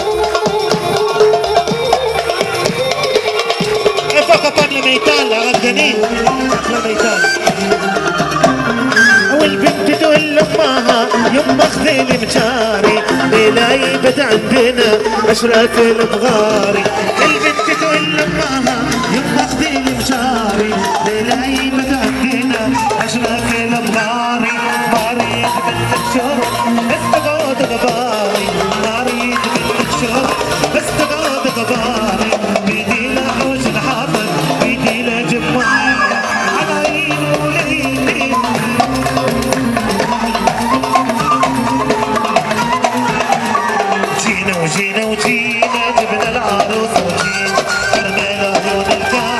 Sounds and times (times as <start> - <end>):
Music: 0.0 - 49.3.